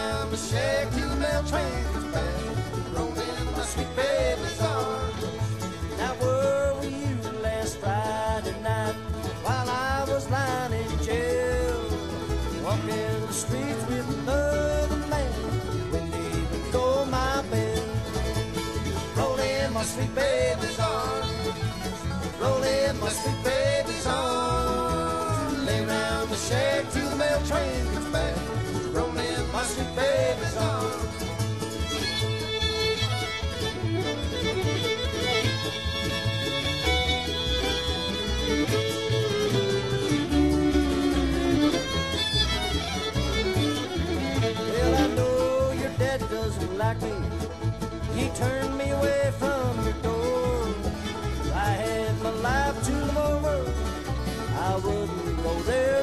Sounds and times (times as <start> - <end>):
Music: 0.0 - 56.0.